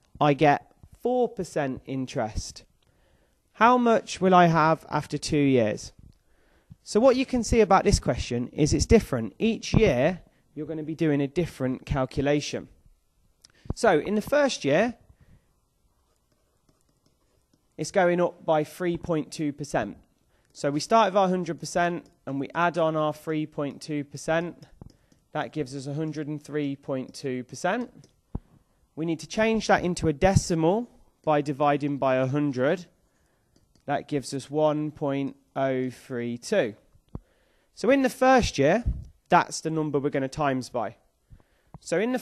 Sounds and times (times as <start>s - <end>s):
Speech: 0.2s - 2.7s, 3.6s - 6.0s, 6.8s - 12.8s, 13.7s - 15.0s, 17.8s - 20.0s, 20.6s - 24.7s, 25.4s - 28.0s, 29.0s - 32.9s, 33.9s - 36.8s, 37.8s - 41.1s, 41.8s - 42.2s.